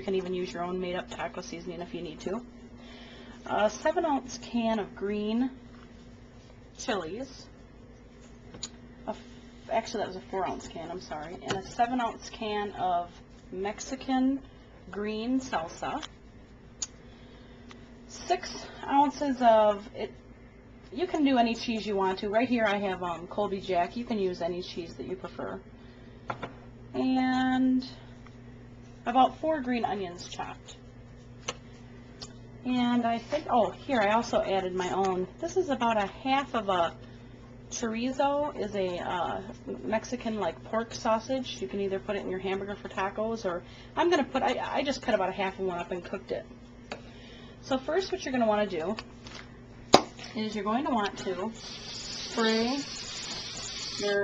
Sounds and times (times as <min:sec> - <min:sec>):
Speech: 0:00.0 - 0:02.5, 0:03.4 - 0:05.6, 0:06.8 - 0:07.6, 0:09.1 - 0:16.1, 0:18.1 - 0:20.2, 0:20.9 - 0:25.6, 0:27.0 - 0:28.0, 0:29.0 - 0:30.8, 0:32.6 - 0:37.0, 0:37.7 - 0:46.5, 0:47.6 - 0:49.0, 0:50.3 - 0:51.6, 0:52.3 - 0:52.9, 0:54.0 - 0:54.2.